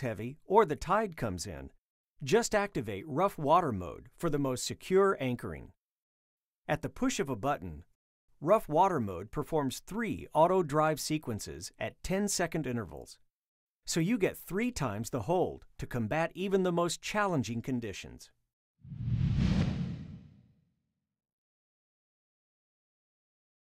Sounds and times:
Speech: 0.0 - 5.8, 6.7 - 13.2, 13.9 - 18.4.

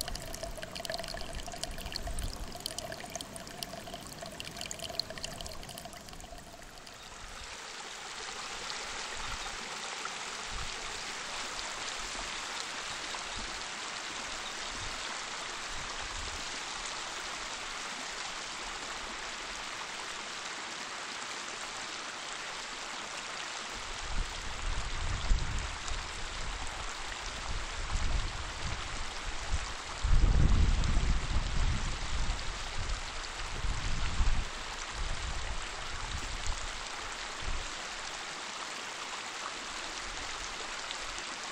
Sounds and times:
Water: 0.0 - 41.5.

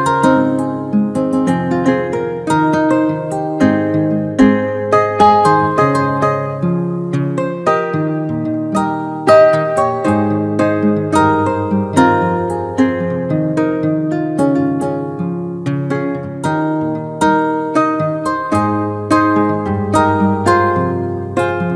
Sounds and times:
Acoustic guitar: 0.0 - 21.7.

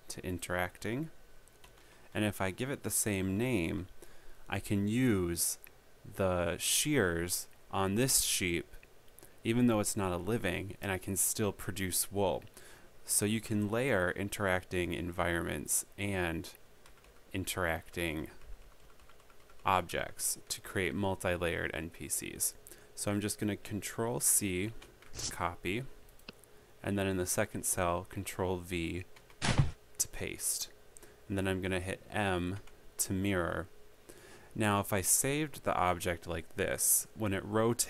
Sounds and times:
Speech: 0.0 - 1.2, 2.2 - 3.9, 4.5 - 8.8, 9.5 - 12.5, 13.1 - 16.6, 17.3 - 18.4, 19.6 - 26.0, 26.8 - 29.1, 30.0 - 33.7, 34.6 - 37.9.

